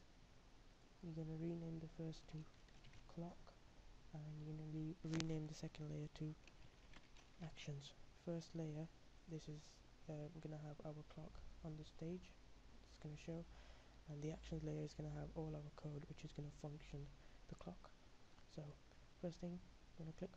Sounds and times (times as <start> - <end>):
Speech: 1.0 - 2.5, 3.1 - 6.4, 7.4 - 20.3.